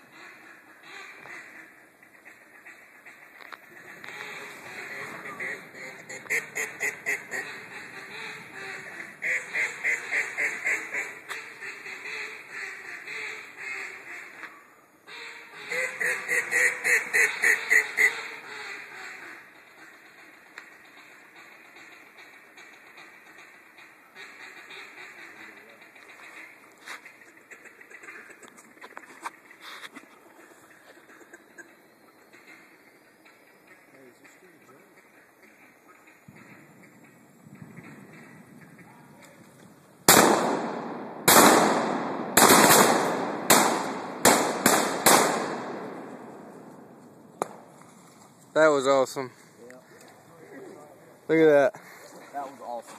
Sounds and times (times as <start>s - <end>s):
Quack: 0.1s - 39.5s.